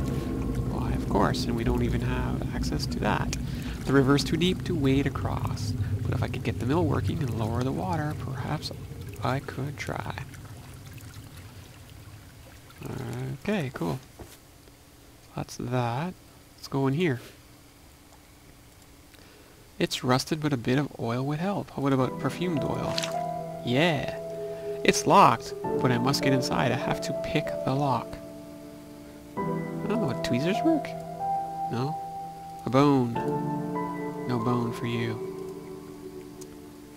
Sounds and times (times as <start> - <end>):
Speech: 0.7 - 10.3, 12.8 - 14.0, 15.3 - 17.3, 19.8 - 23.0, 23.7 - 24.2, 24.8 - 28.2, 29.8 - 31.0, 31.7 - 32.0, 32.6 - 33.2, 34.3 - 35.2
Pour: 6.2 - 13.4, 22.4 - 23.2.